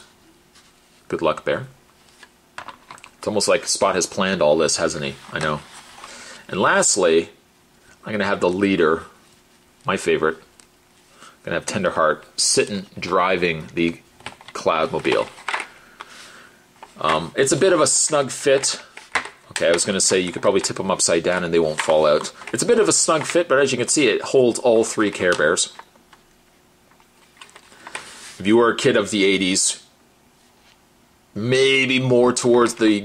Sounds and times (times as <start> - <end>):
Speech: 1.1 - 1.8, 3.2 - 5.7, 6.5 - 7.4, 8.0 - 9.2, 9.8 - 10.5, 11.4 - 15.4, 17.0 - 18.9, 19.5 - 25.8, 28.4 - 29.9, 31.4 - 33.0.